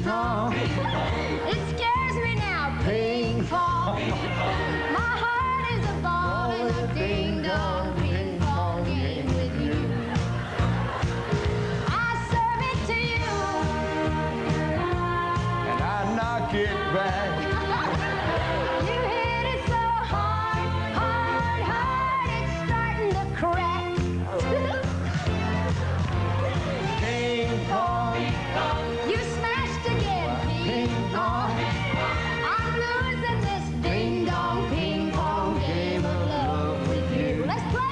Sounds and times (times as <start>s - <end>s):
Music: 0.0s - 37.9s.